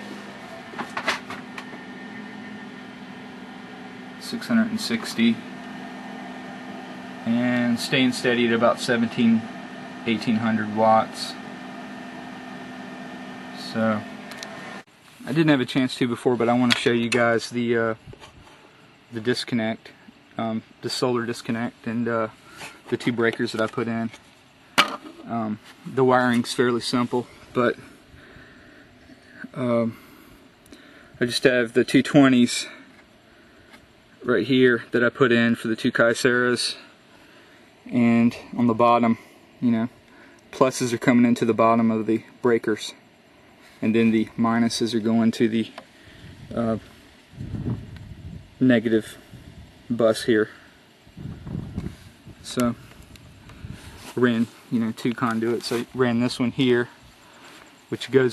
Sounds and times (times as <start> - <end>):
Speech: 4.2 - 5.4, 7.2 - 11.5, 13.6 - 14.1, 15.2 - 18.0, 19.1 - 24.2, 25.2 - 27.9, 29.4 - 30.0, 31.2 - 32.8, 34.2 - 36.9, 37.9 - 43.0, 43.8 - 45.8, 46.5 - 46.9, 48.6 - 49.2, 49.9 - 50.6, 52.4 - 52.8, 54.2 - 57.0, 57.9 - 58.3.